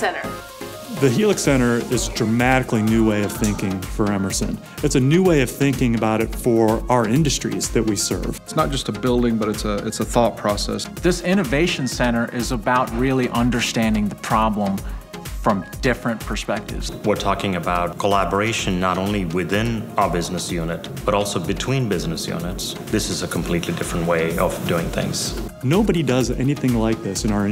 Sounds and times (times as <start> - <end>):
Music: 0.0 - 27.5
Speech: 1.0 - 14.8, 15.4 - 27.5.